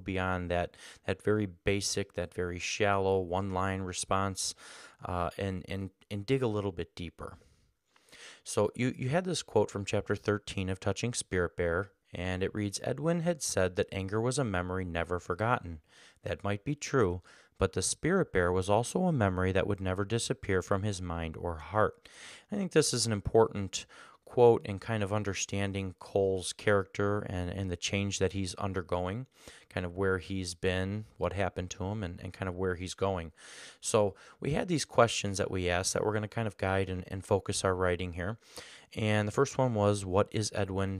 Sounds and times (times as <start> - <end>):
Speech: 0.0 - 7.4, 8.4 - 40.9.